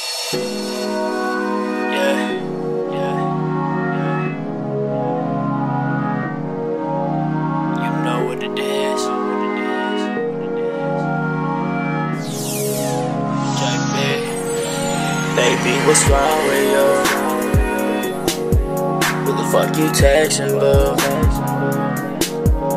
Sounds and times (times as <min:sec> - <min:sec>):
Music: 0:00.0 - 0:22.7.